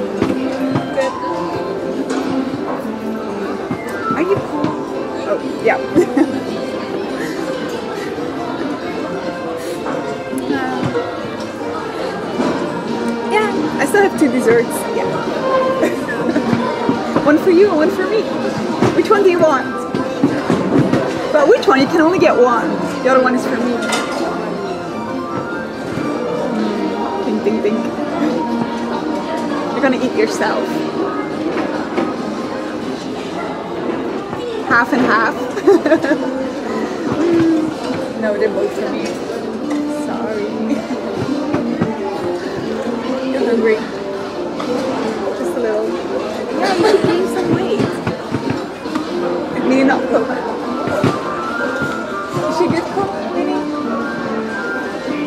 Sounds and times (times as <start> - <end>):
Music: 0.0 - 55.2.